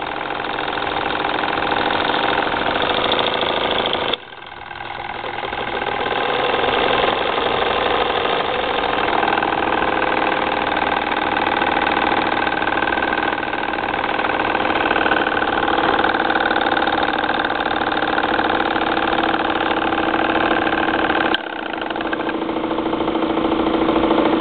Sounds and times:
Engine: 0.0s - 24.4s.

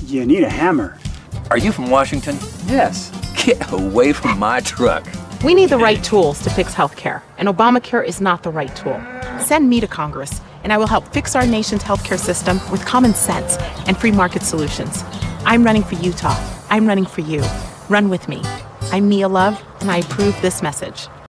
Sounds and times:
Music: 0.0s - 21.1s
Speech: 0.0s - 21.1s.

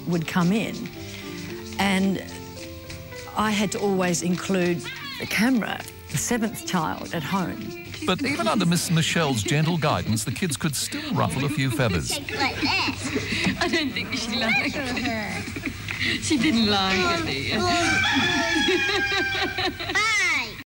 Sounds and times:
Crowing, cock-a-doodle-doo: 17.6s - 19.8s.

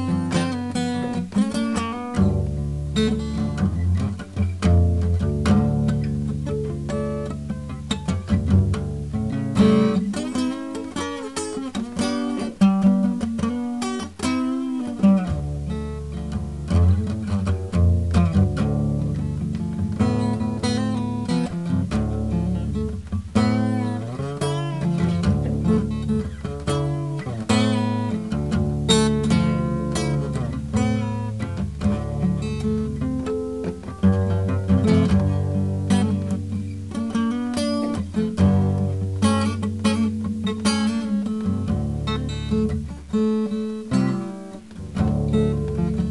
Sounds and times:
Acoustic guitar: 0.0s - 46.1s.

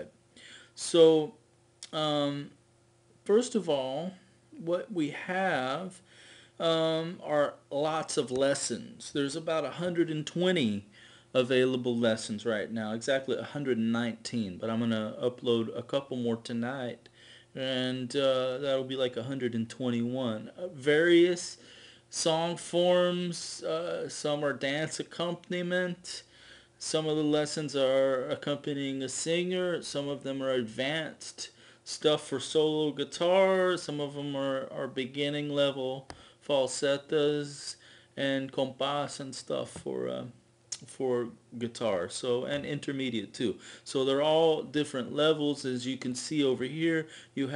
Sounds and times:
Speech: 0.8s - 2.6s, 3.2s - 6.0s, 6.6s - 47.5s.

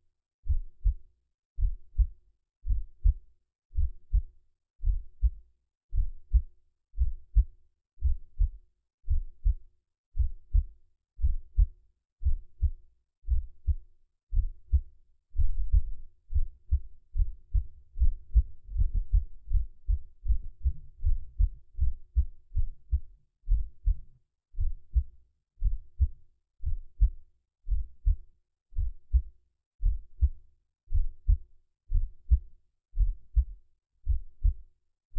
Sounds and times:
Heart sounds, heartbeat: 0.5s - 1.0s, 1.6s - 3.2s, 3.8s - 9.6s, 10.2s - 28.2s, 28.8s - 34.6s.

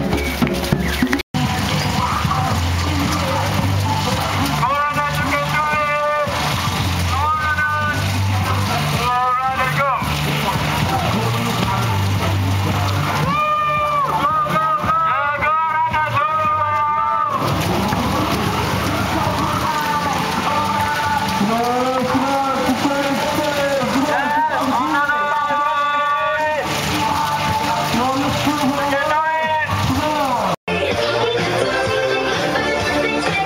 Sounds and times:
Run: 0.0s - 30.6s
Music: 0.0s - 33.4s
Speech: 1.7s - 6.5s, 7.1s - 18.0s, 18.8s - 30.6s.

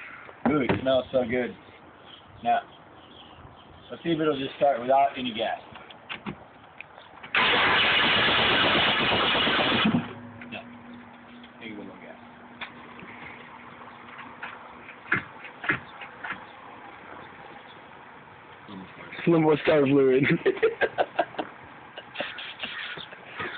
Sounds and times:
Vehicle: 0.0s - 23.5s
Speech: 3.9s - 5.7s, 11.6s - 12.2s, 18.7s - 20.4s.

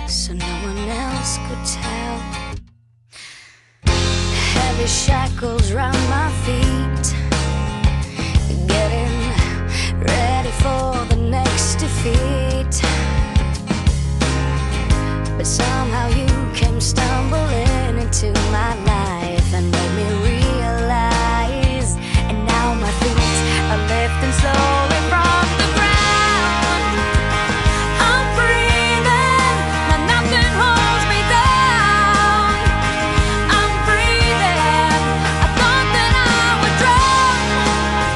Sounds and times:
Music: 0.0s - 38.1s.

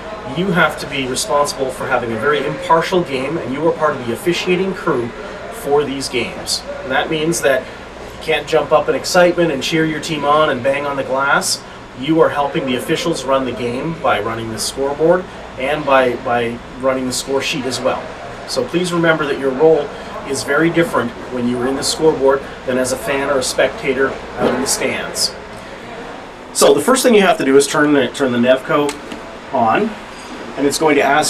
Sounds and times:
Speech: 0.0s - 30.0s, 30.6s - 31.2s.

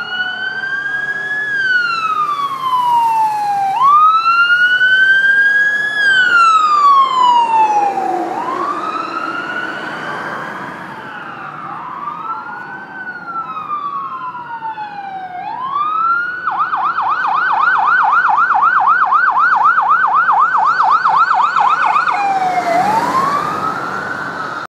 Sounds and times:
Fire engine, fire truck (siren): 0.0s - 24.6s.

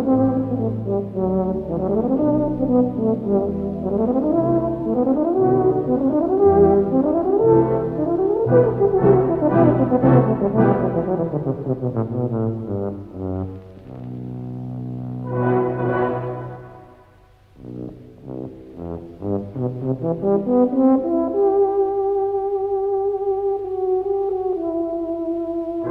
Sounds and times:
French horn: 0.0s - 25.9s
Orchestra: 0.0s - 25.9s.

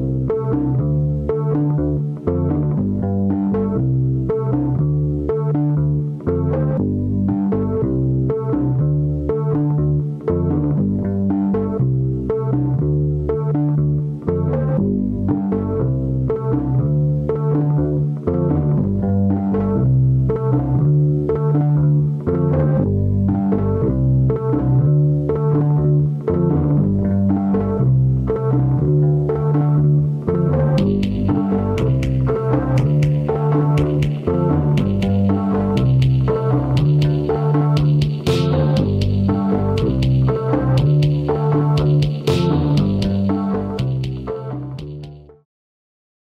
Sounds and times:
Music: 0.0s - 45.5s.

